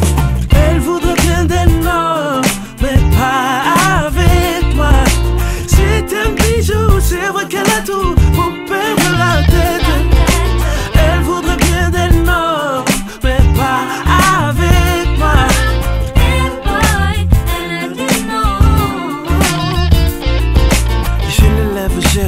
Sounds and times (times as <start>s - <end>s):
Music: 0.0s - 22.2s.